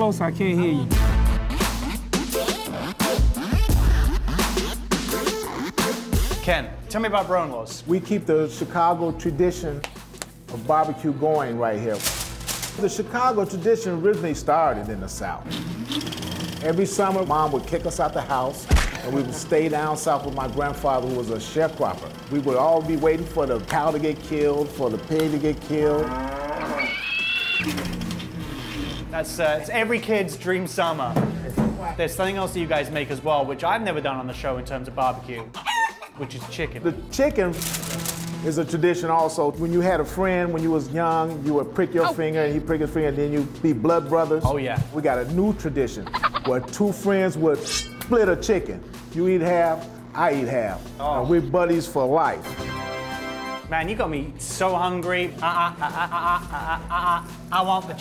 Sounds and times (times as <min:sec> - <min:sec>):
Music: 0:00.0 - 0:58.0.